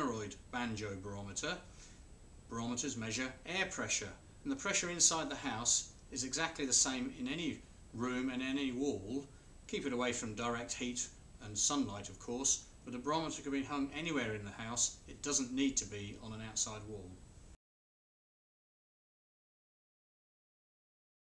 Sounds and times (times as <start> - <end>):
Speech: 0.0 - 1.7, 2.5 - 17.2.